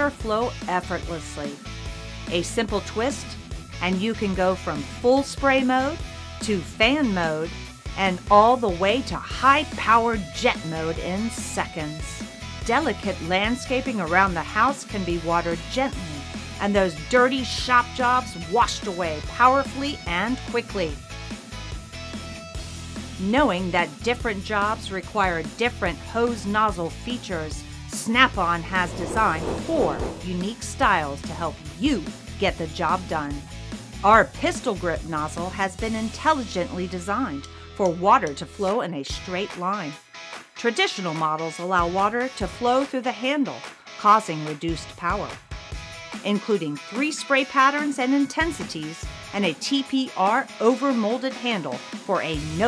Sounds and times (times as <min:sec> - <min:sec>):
Speech: 0:00.0 - 0:01.6, 0:02.3 - 0:21.0, 0:23.2 - 0:33.4, 0:34.0 - 0:40.0, 0:40.6 - 0:45.4, 0:46.2 - 0:52.6
Music: 0:00.0 - 0:52.6.